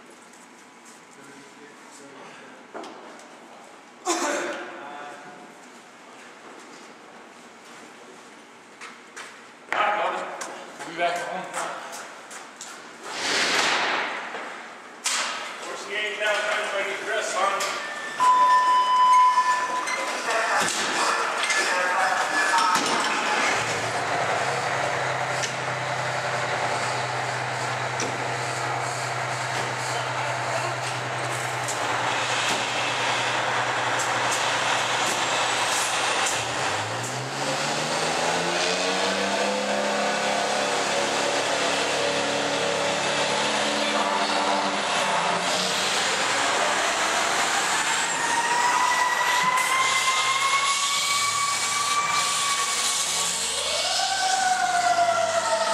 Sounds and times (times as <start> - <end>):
Speech: 9.7 - 11.9, 15.6 - 17.8.